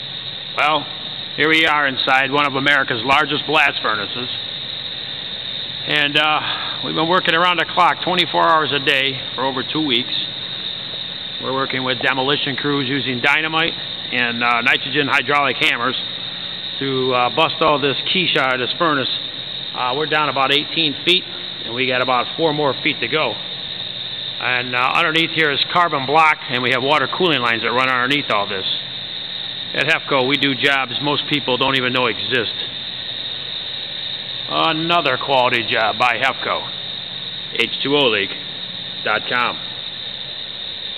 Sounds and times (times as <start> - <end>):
Speech: 0.6 - 4.4, 5.8 - 10.3, 11.4 - 16.0, 16.8 - 19.2, 19.8 - 23.4, 24.4 - 28.8, 29.7 - 32.7, 34.5 - 36.7, 37.6 - 38.4, 39.0 - 39.6.